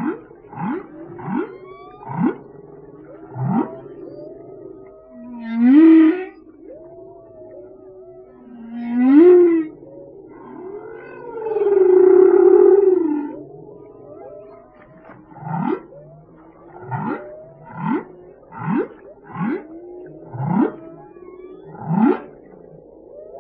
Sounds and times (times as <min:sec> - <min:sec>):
Whale vocalization: 0:00.0 - 0:23.4.